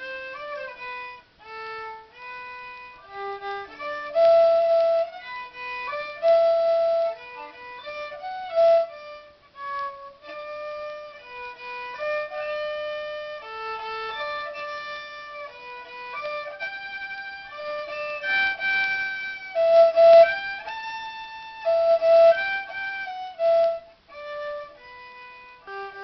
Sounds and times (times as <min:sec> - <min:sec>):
Violin, fiddle: 0:00.0 - 0:26.0.